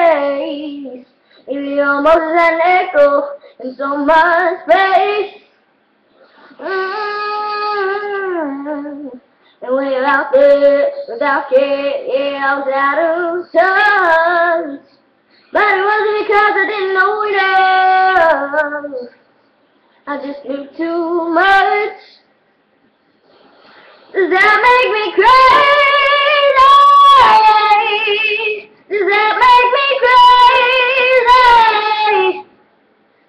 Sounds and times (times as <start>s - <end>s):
Female singing: 0.0s - 5.4s, 6.5s - 15.0s, 15.6s - 19.2s, 20.1s - 22.3s, 24.2s - 32.5s.